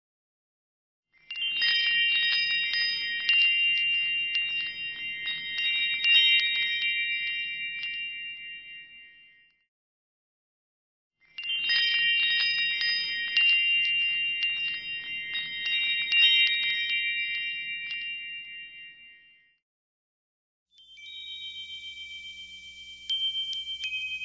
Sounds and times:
Wind chime: 1.1 - 9.7, 11.2 - 19.6, 20.7 - 24.2.

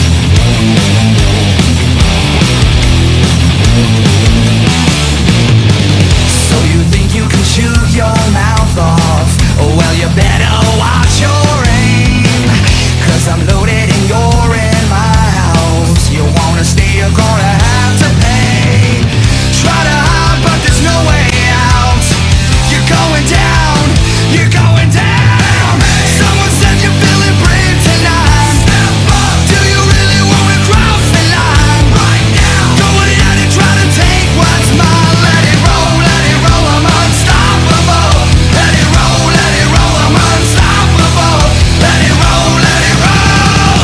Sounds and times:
Music: 0.0 - 43.8.

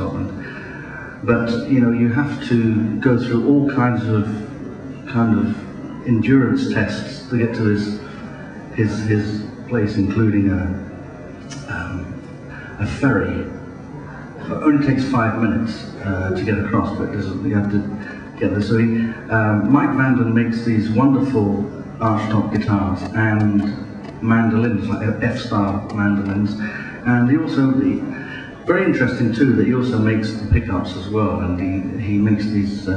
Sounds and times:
Speech: 0.0 - 32.9.

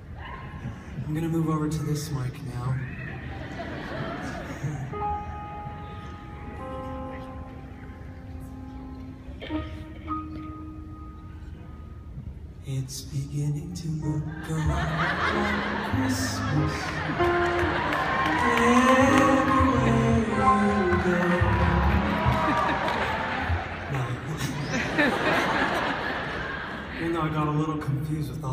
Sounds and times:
Music: 4.6 - 24.0.

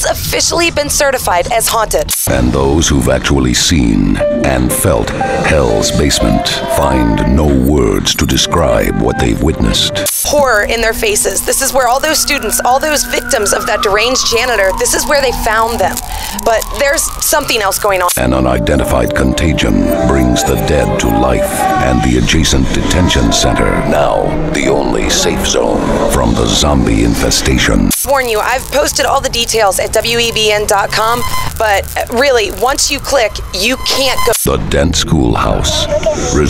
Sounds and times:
Speech: 0.0 - 36.5
Radio: 0.1 - 36.5.

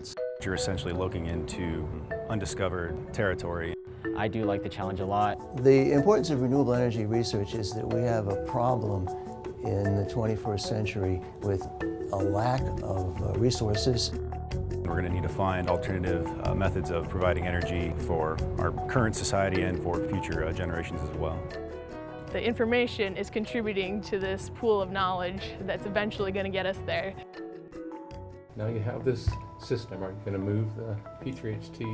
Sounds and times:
Music: 0.0 - 31.9.

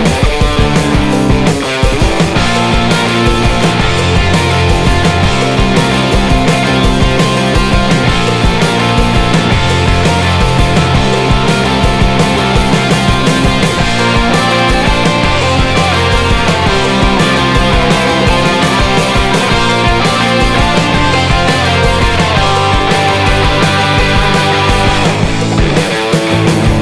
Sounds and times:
Music: 0.0 - 26.8.

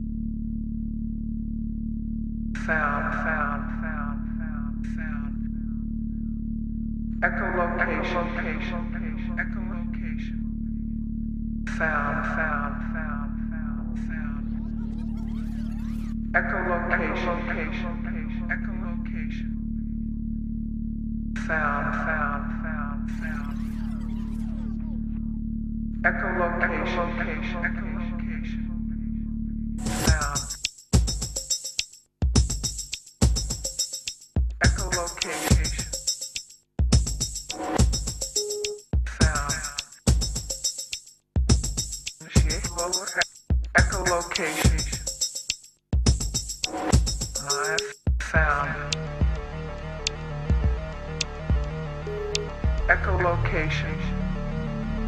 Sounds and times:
Speech: 2.6 - 5.6, 7.2 - 10.5, 11.7 - 15.6, 16.3 - 19.6, 21.4 - 25.2, 26.0 - 28.8, 29.9 - 30.6, 34.6 - 36.0, 39.1 - 39.9, 42.2 - 43.2, 43.8 - 45.1, 47.4 - 49.1, 52.8 - 54.4.

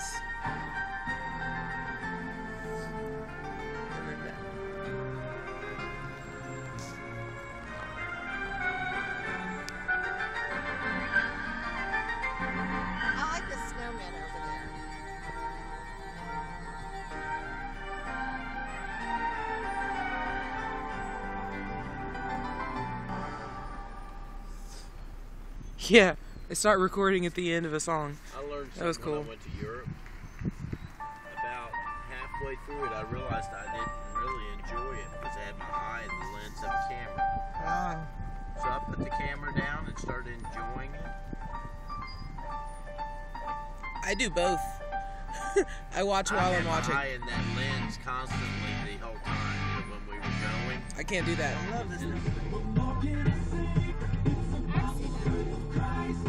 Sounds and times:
Music: 0.0 - 25.0, 31.0 - 56.2
Speech: 25.8 - 29.9, 31.4 - 41.1, 44.0 - 44.8, 46.0 - 52.2.

